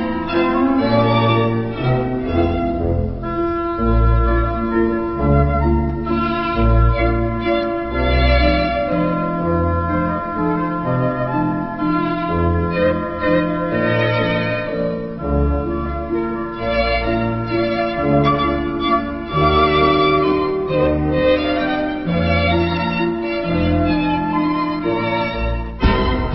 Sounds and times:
Tender music: 0:00.0 - 0:26.3.

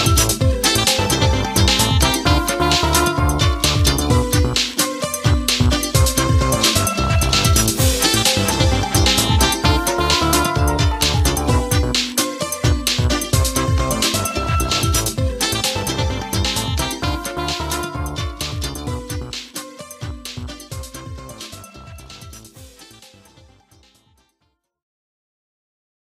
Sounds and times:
Video game music: 0:00.0 - 0:24.2.

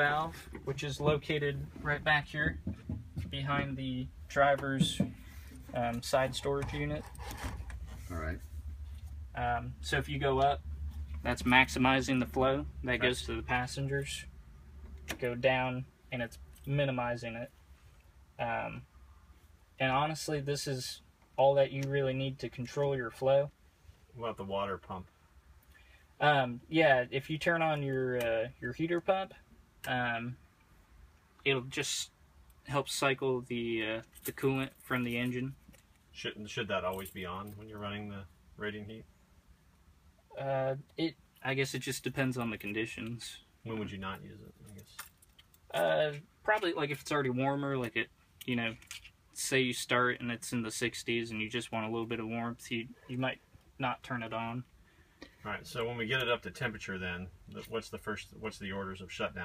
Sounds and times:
Speech: 0:00.0 - 0:02.6, 0:03.2 - 0:05.1, 0:05.7 - 0:07.1, 0:08.1 - 0:08.4, 0:09.4 - 0:10.6, 0:11.2 - 0:14.3, 0:15.2 - 0:17.5, 0:18.4 - 0:18.8, 0:19.8 - 0:23.6, 0:24.2 - 0:25.1, 0:26.2 - 0:30.4, 0:31.4 - 0:35.6, 0:36.2 - 0:39.1, 0:40.3 - 0:45.0, 0:45.7 - 0:48.8, 0:49.4 - 0:54.7, 0:55.4 - 0:59.4.

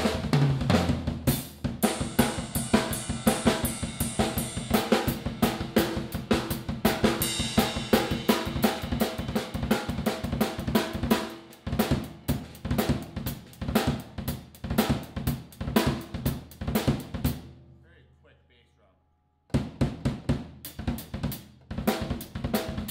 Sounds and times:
Drum roll: 0:00.0 - 0:17.5, 0:19.5 - 0:22.9
Drum kit: 0:00.0 - 0:17.6, 0:19.5 - 0:22.9.

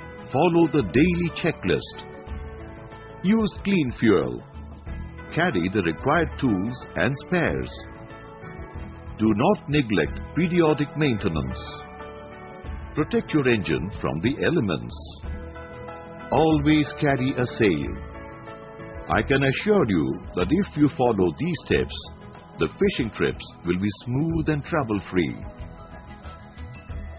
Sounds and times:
Music: 0:00.0 - 0:27.1
Speech: 0:00.3 - 0:02.0, 0:03.2 - 0:04.4, 0:05.4 - 0:07.9, 0:09.2 - 0:11.8, 0:13.0 - 0:15.2, 0:16.3 - 0:18.0, 0:19.1 - 0:25.5.

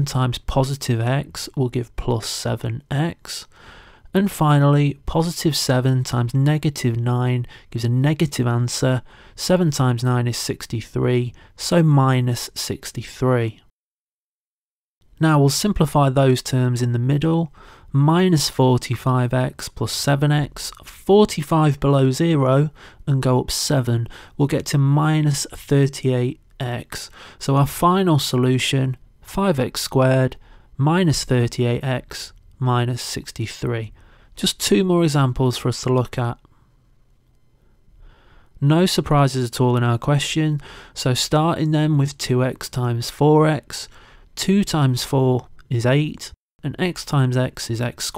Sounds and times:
Speech: 0:00.0 - 0:03.5, 0:04.1 - 0:13.7, 0:15.2 - 0:36.5, 0:38.6 - 0:48.1.

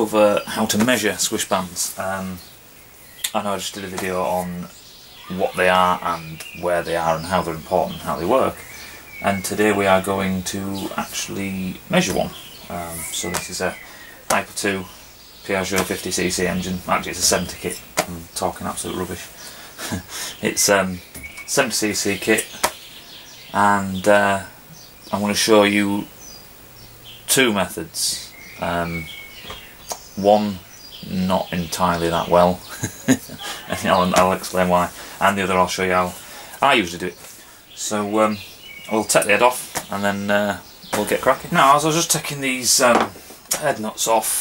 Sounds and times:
Speech: 0:00.0 - 0:02.4, 0:03.3 - 0:14.9, 0:15.5 - 0:22.6, 0:23.5 - 0:26.1, 0:27.3 - 0:29.1, 0:30.2 - 0:44.4.

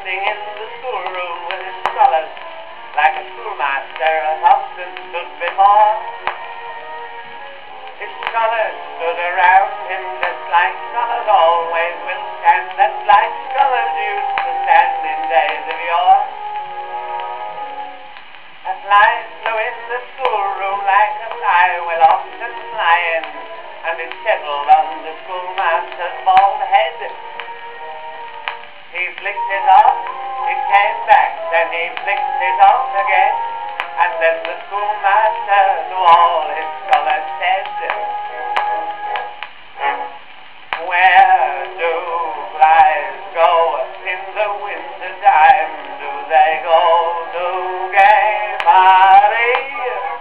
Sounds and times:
Synthetic singing: 0:00.0 - 0:06.4, 0:08.0 - 0:16.3, 0:18.7 - 0:27.3, 0:29.0 - 0:40.0, 0:40.8 - 0:50.2
Music: 0:00.0 - 0:50.2.

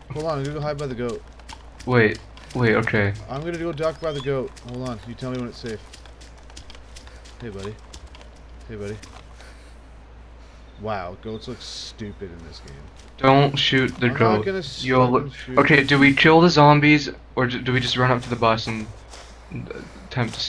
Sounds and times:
Speech: 0:00.1 - 0:01.2, 0:01.9 - 0:05.8, 0:07.4 - 0:07.8, 0:08.6 - 0:09.0, 0:10.8 - 0:18.9, 0:19.6 - 0:20.4.

